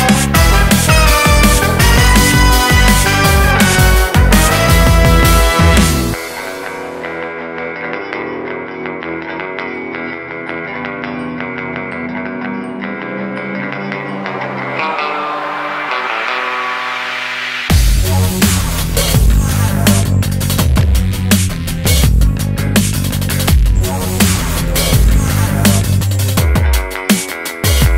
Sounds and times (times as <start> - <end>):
Exciting music: 0.0 - 7.6, 13.1 - 27.9.